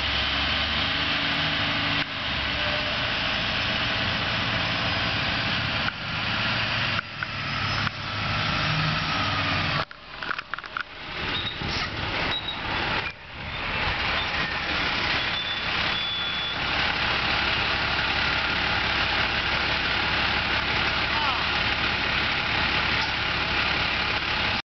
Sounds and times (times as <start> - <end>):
Heavy engine (low frequency): 0.0 - 24.6
Vehicle: 0.0 - 24.6
Idling: 13.2 - 24.6
Speech: 20.8 - 21.6.